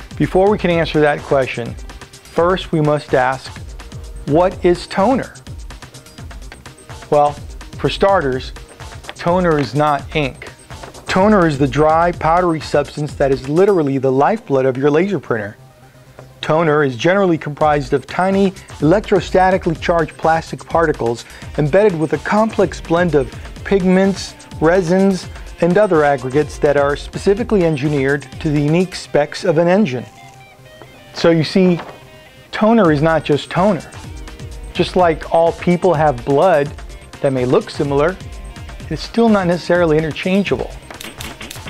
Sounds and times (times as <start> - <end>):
Music: 0.0 - 41.6
Speech: 0.2 - 3.6, 4.2 - 5.4, 7.1 - 8.6, 9.2 - 10.5, 11.1 - 15.6, 16.4 - 30.1, 31.2 - 31.9, 32.5 - 34.0, 34.8 - 38.2, 38.9 - 40.8.